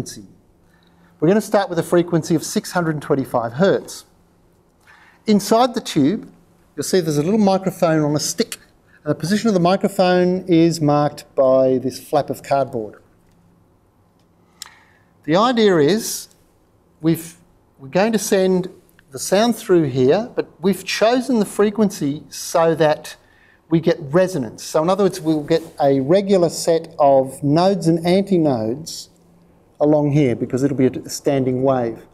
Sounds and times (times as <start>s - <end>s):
Speech: 0.0s - 0.4s, 1.2s - 4.2s, 5.2s - 13.1s, 15.3s - 16.4s, 17.0s - 29.2s, 29.8s - 32.1s.